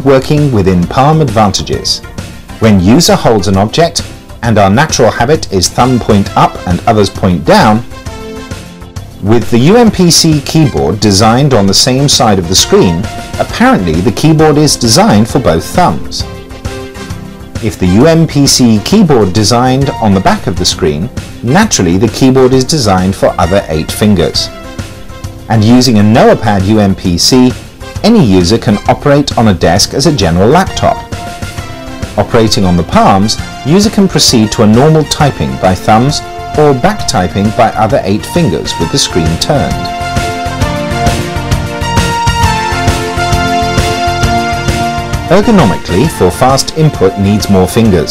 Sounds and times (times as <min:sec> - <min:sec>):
Speech: 0:00.0 - 0:02.0, 0:02.6 - 0:07.9, 0:09.2 - 0:16.3, 0:17.6 - 0:24.6, 0:25.5 - 0:31.1, 0:32.2 - 0:39.9, 0:45.3 - 0:48.1
Music: 0:00.0 - 0:48.1.